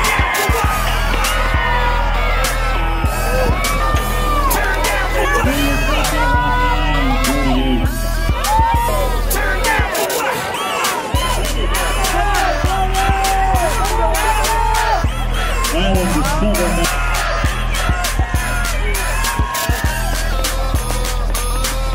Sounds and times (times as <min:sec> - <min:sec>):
Music: 0:00.0 - 0:21.9
Outside, urban or manmade: 0:00.0 - 0:21.9
Speech: 0:05.2 - 0:07.9, 0:15.7 - 0:17.0.